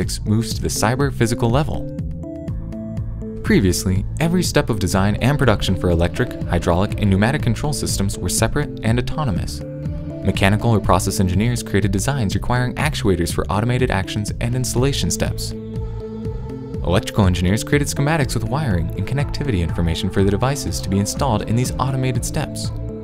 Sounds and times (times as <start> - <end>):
Music: 0.0 - 23.0.